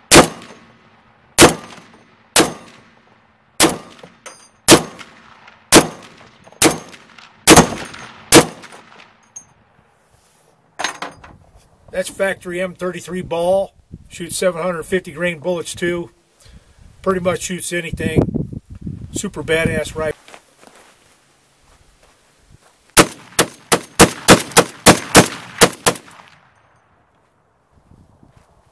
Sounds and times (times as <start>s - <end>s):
Gunshot, gunfire: 0.1s - 0.6s, 1.4s - 2.8s, 3.6s - 4.1s, 4.7s - 8.8s, 23.0s - 26.3s.